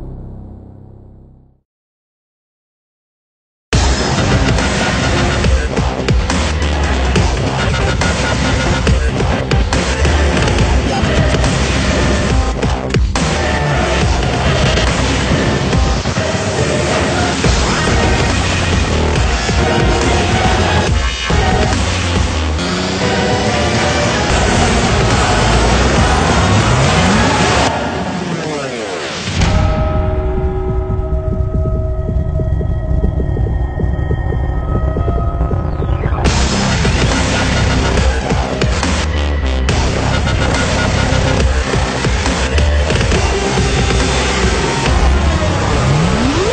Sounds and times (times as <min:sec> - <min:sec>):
Throbbing: 0:03.8 - 0:46.5
Hum: 0:29.4 - 0:38.0, 0:43.2 - 0:46.5.